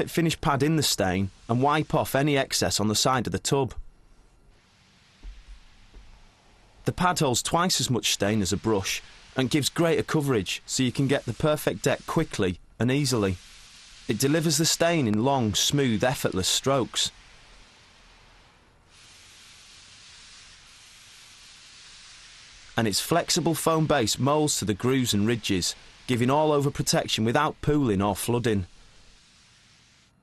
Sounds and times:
Speech: 0.0s - 3.8s, 6.9s - 13.4s, 14.1s - 17.1s, 22.8s - 28.7s.

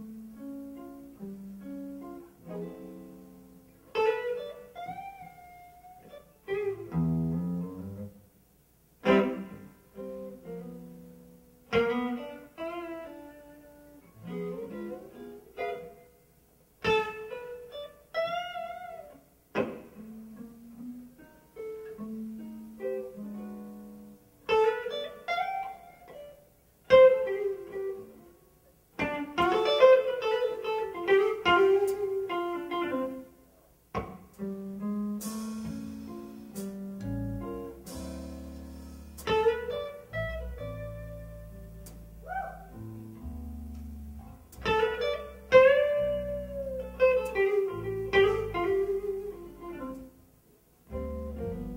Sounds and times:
Strum: 9.0s - 16.1s, 33.9s - 50.2s, 50.8s - 51.7s.

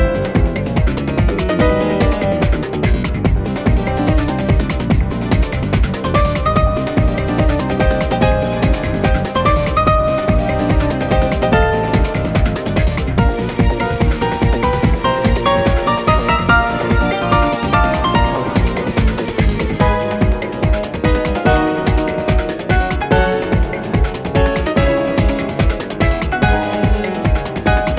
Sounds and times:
Music: 0.0s - 27.9s.

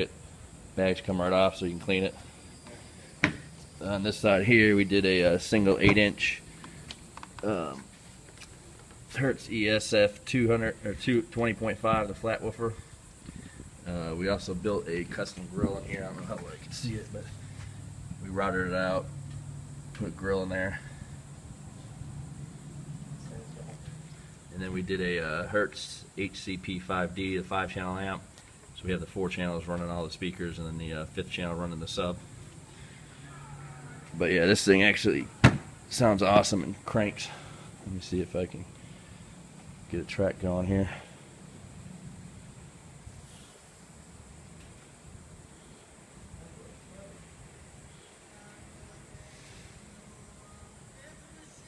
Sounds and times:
Speech: 0.8s - 2.2s, 3.8s - 6.4s, 7.4s - 7.9s, 9.1s - 12.8s, 13.9s - 17.3s, 18.2s - 19.1s, 20.0s - 20.9s, 24.5s - 32.2s, 33.3s - 38.7s, 39.9s - 41.1s.

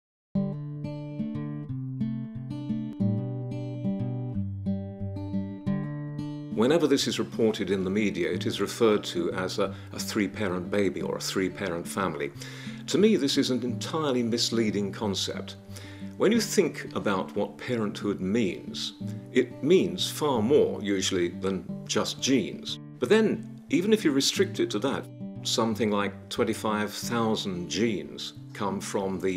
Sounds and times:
Music: 0.4s - 29.3s
Speech: 6.6s - 15.6s, 16.2s - 29.3s.

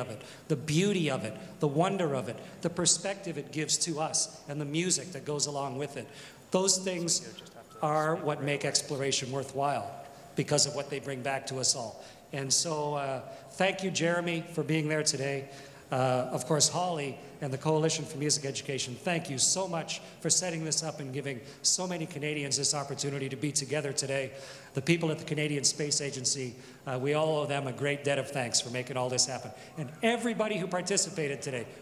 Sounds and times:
Speech: 0.0s - 31.7s.

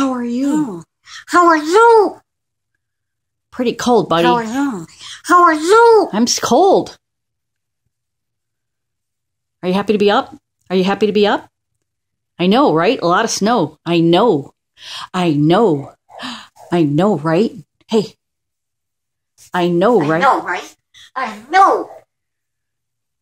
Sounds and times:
Speech: 0.0s - 2.2s, 3.6s - 7.0s, 15.2s - 16.0s, 16.6s - 18.2s, 19.4s - 22.0s.

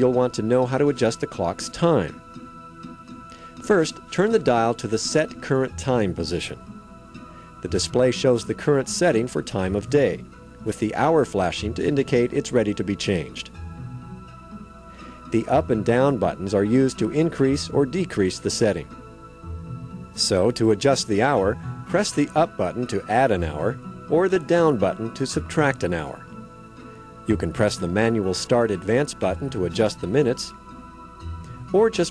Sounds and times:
Speech: 0.0s - 2.2s, 3.7s - 6.6s, 7.6s - 13.5s, 15.4s - 18.9s, 20.2s - 26.2s, 27.3s - 30.6s, 31.7s - 32.1s
Music: 0.0s - 32.1s.

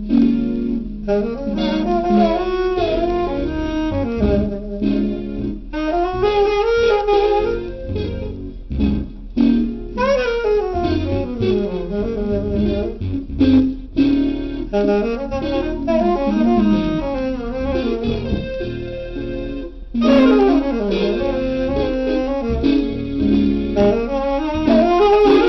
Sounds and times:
Music: 0.0s - 25.4s.

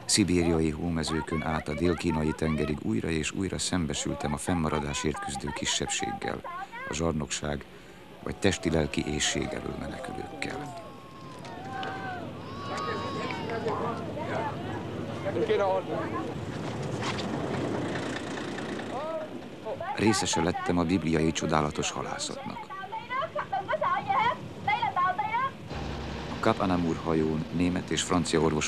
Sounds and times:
Sailboat, sailing ship: 10.0s - 20.2s.

